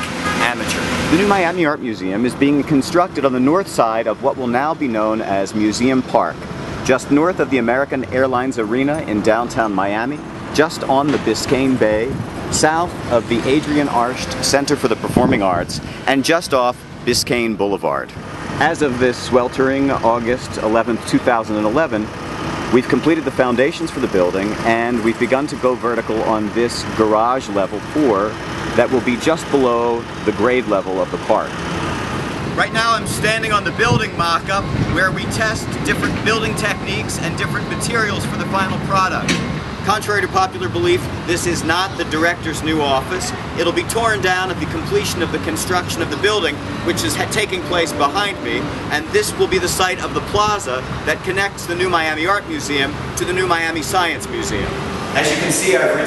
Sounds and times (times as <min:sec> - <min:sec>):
Outside, urban or manmade: 0:00.0 - 0:56.0
Speech: 0:00.3 - 0:22.1, 0:22.7 - 0:31.6, 0:32.6 - 0:39.3, 0:39.9 - 0:56.0.